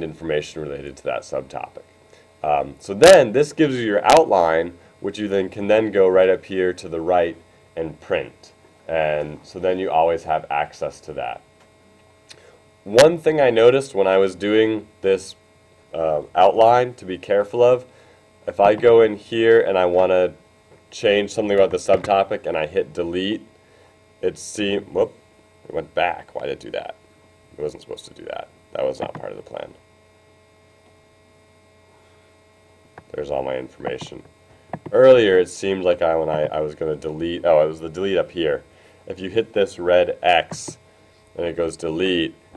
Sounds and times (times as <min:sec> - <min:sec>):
Hum: 0:00.0 - 0:42.5
Mains hum: 0:00.0 - 0:42.5.